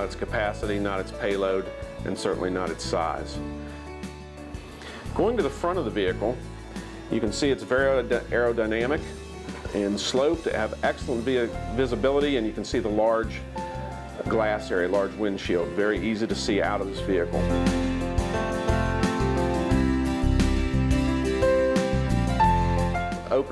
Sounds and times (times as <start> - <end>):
Speech: 0.0 - 3.4, 5.1 - 6.4, 7.1 - 9.1, 9.7 - 13.4, 14.2 - 17.5, 23.2 - 23.5
Music: 0.0 - 23.5.